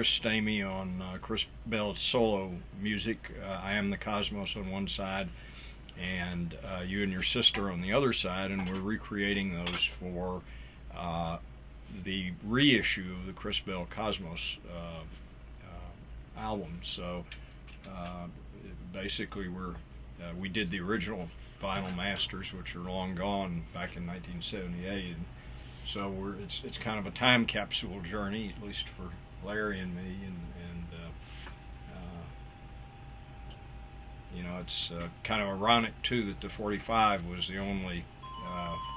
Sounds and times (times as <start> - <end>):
Speech: 0.0 - 5.3, 6.0 - 25.3, 25.9 - 31.2, 31.9 - 32.4, 34.3 - 38.9.